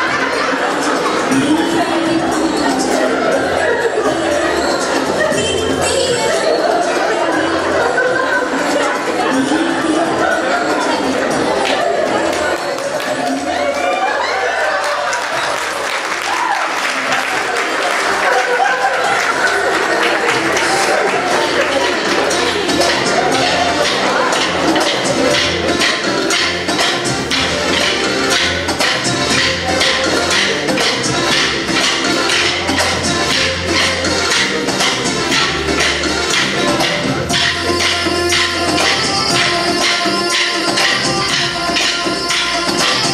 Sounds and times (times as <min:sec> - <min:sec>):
Inside, large room or hall: 0:00.0 - 0:43.1
Music: 0:00.0 - 0:43.1.